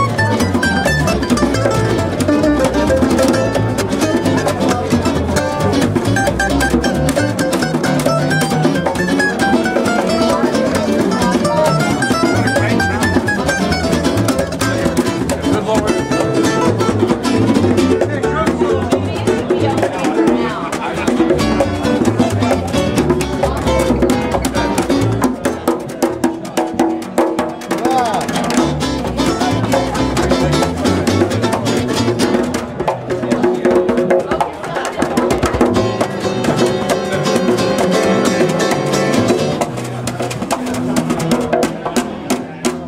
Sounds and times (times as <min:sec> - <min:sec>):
Drum: 0:00.0 - 0:42.8.